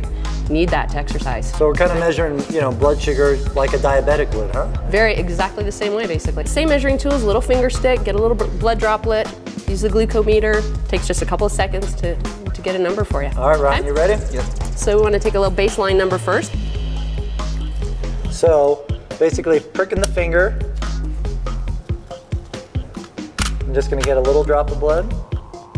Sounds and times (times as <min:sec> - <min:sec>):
Music: 0:00.0 - 0:25.7.